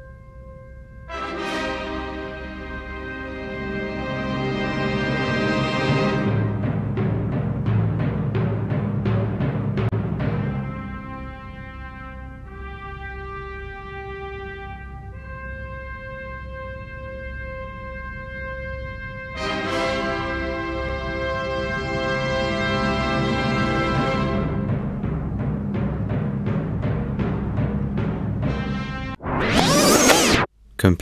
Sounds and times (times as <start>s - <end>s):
Timpani: 1.1s - 30.4s.